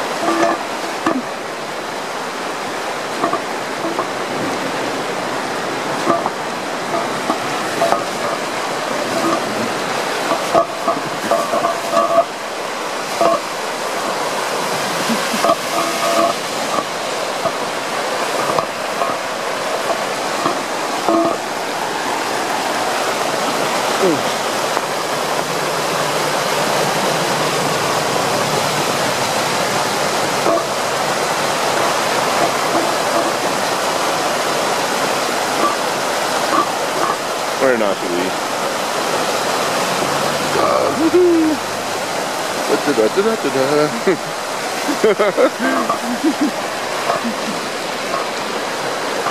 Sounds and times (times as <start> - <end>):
Waterfall: 0.0 - 49.3.